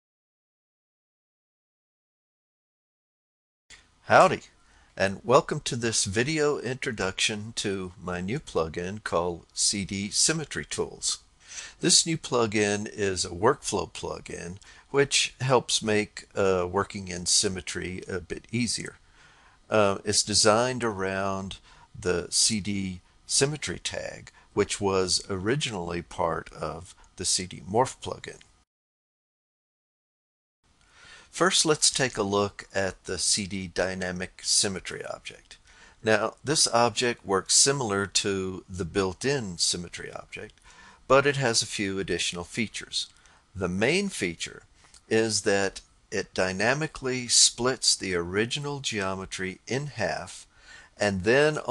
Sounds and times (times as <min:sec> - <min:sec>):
Speech: 0:04.1 - 0:11.2, 0:11.8 - 0:19.0, 0:19.7 - 0:28.5, 0:31.4 - 0:51.7.